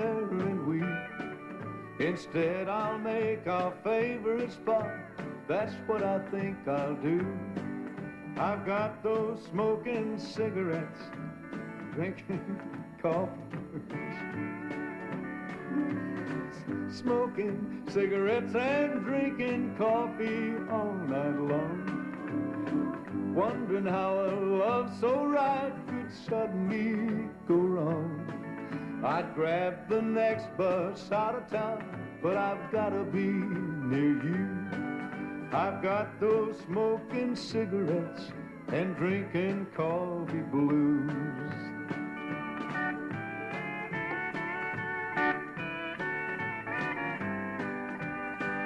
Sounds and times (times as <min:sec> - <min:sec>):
Male singing: 0:00.0 - 0:01.0, 0:02.0 - 0:07.5, 0:08.4 - 0:11.1, 0:11.9 - 0:14.2, 0:15.8 - 0:22.0, 0:23.3 - 0:28.3, 0:29.0 - 0:34.7, 0:35.5 - 0:41.7
Music: 0:00.0 - 0:48.6.